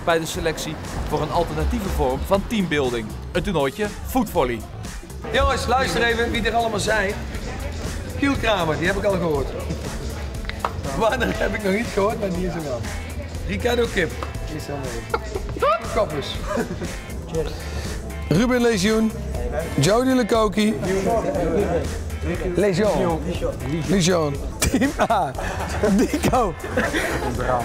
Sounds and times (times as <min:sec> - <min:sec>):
Speech: 0:00.0 - 0:04.6, 0:18.3 - 0:24.4
Music: 0:00.0 - 0:27.6.